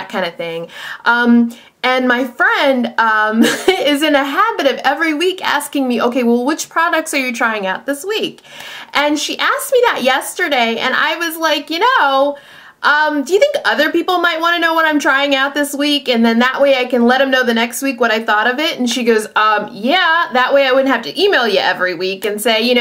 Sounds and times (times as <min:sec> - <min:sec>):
Speech: 0:00.0 - 0:08.4, 0:09.0 - 0:22.8.